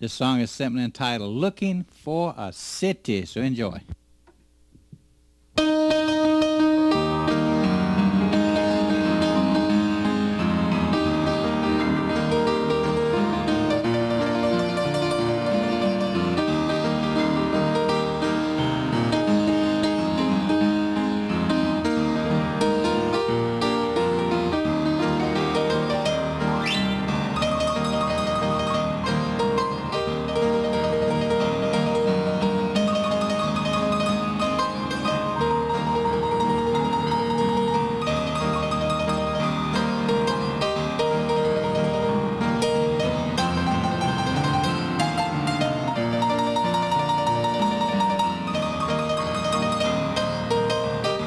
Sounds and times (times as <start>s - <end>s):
Gospel music: 5.6s - 51.2s.